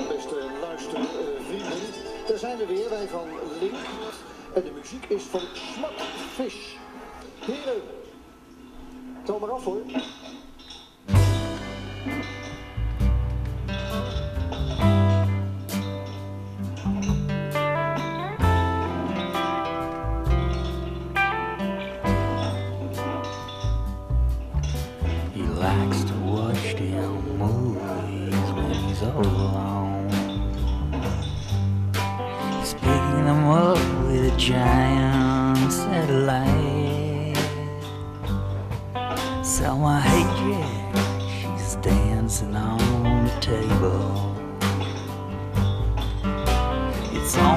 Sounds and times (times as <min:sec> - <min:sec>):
Music: 0:00.0 - 0:09.9, 0:11.0 - 0:47.5
Television: 0:00.0 - 0:47.5.